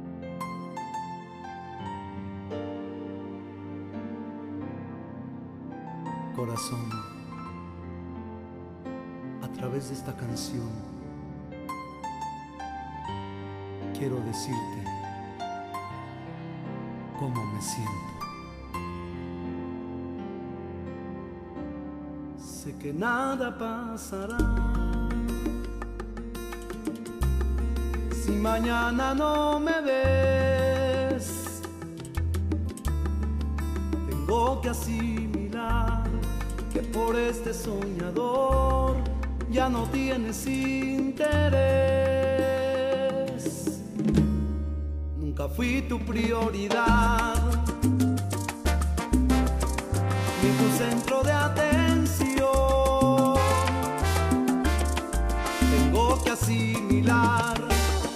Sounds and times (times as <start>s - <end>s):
Music: 0.0s - 58.1s.